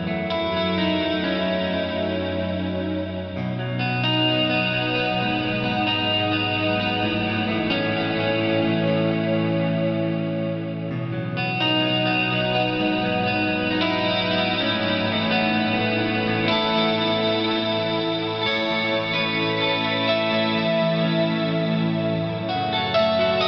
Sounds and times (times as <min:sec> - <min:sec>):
Music: 0:00.0 - 0:23.4.